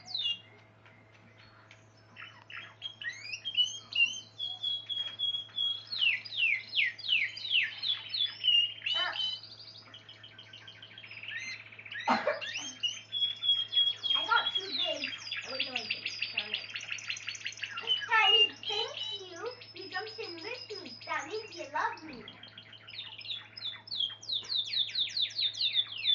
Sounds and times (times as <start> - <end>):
Chirp, tweet: 0.0 - 26.1.